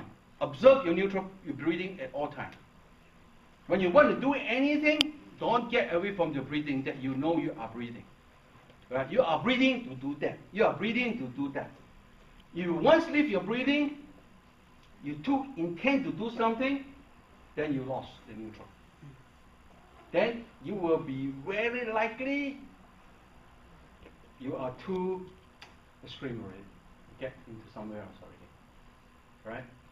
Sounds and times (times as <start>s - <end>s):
Speech: 0.0s - 2.6s, 3.7s - 8.1s, 8.9s - 11.8s, 12.6s - 14.1s, 15.0s - 17.0s, 17.6s - 19.2s, 20.1s - 22.7s, 24.4s - 25.4s, 26.0s - 28.6s, 29.4s - 29.8s.